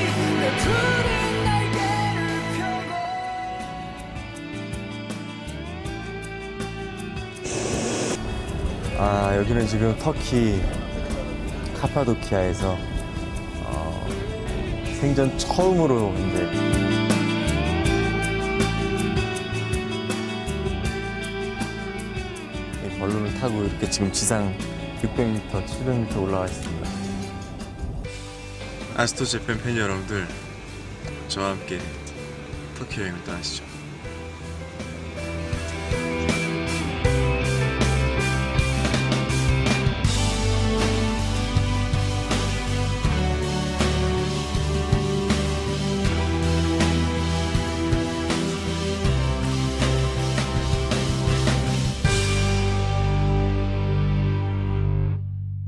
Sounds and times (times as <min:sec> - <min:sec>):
Music: 0:00.0 - 0:55.6
Speech: 0:09.0 - 0:10.7, 0:11.8 - 0:12.8, 0:13.6 - 0:14.2, 0:14.9 - 0:16.6, 0:22.8 - 0:27.0, 0:28.9 - 0:30.4, 0:31.3 - 0:32.1, 0:32.8 - 0:33.7.